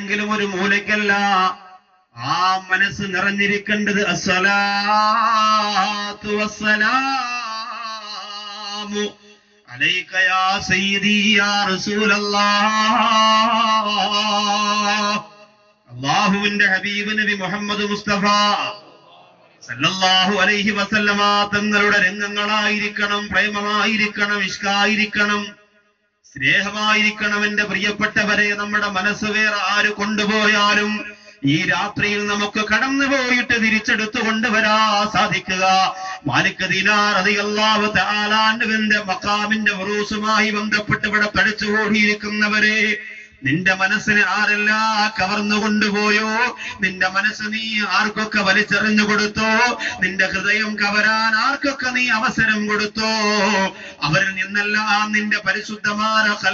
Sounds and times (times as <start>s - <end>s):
Male speech, man speaking: 0.0s - 1.6s, 2.2s - 15.3s, 15.9s - 19.0s, 19.6s - 25.6s, 26.3s - 56.5s.